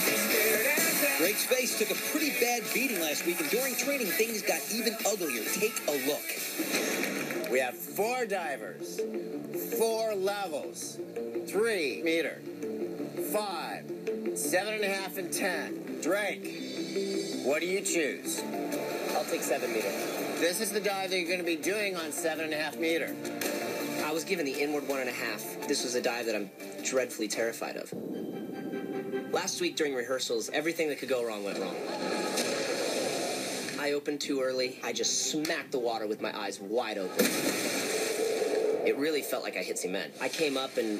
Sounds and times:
Music: 0.0 - 37.9
Speech: 1.0 - 6.4, 7.5 - 9.0, 14.4 - 16.4, 19.1 - 23.1, 24.0 - 28.0, 29.3 - 31.8, 33.8 - 37.2, 38.8 - 40.9.

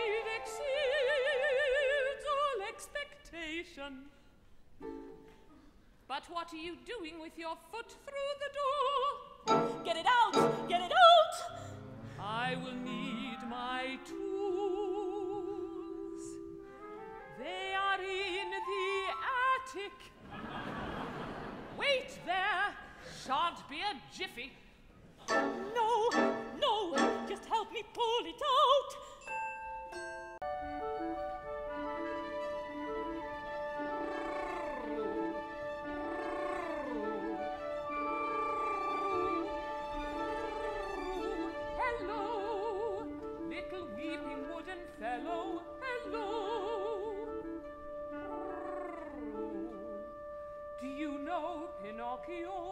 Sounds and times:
Music: 0.0 - 2.3, 4.8 - 5.5, 9.4 - 19.8, 25.2 - 52.7.

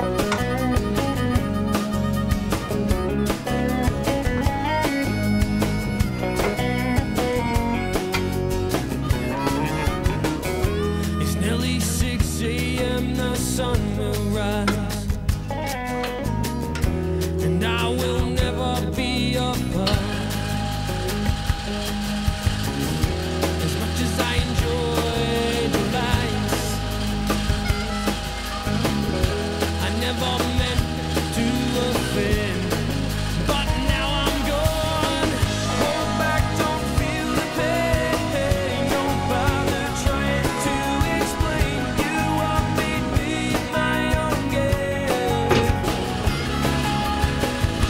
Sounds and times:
Music: 0.0 - 47.8.

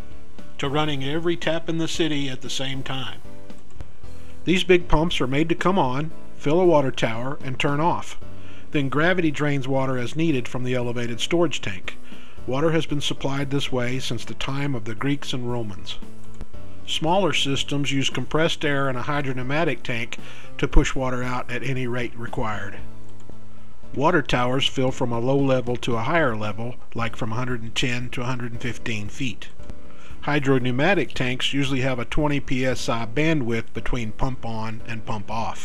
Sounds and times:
Music: 0.0 - 35.6
Speech: 0.6 - 3.3, 4.4 - 16.0, 16.9 - 22.9, 23.9 - 29.6, 30.2 - 35.6.

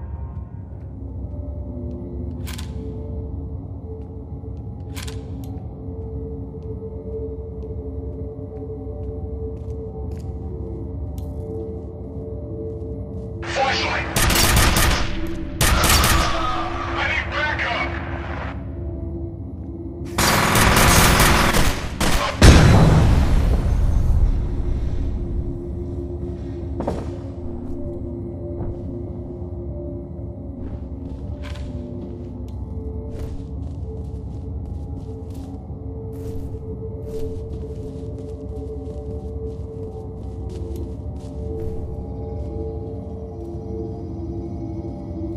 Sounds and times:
Machine gun: 14.2 - 16.6, 20.2 - 22.4.

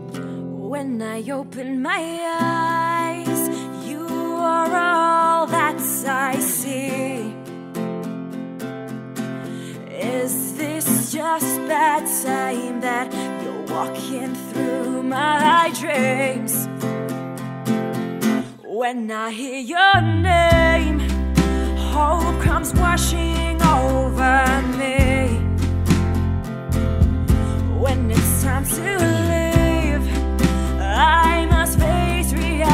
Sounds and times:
Music: 0.0 - 18.7, 20.0 - 32.7.

